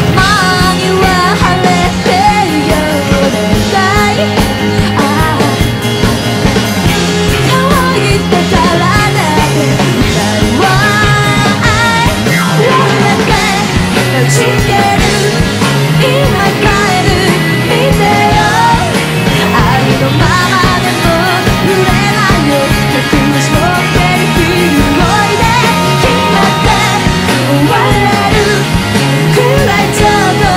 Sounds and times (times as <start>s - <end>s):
Grunge: 0.0s - 30.5s
Singing: 16.0s - 30.5s.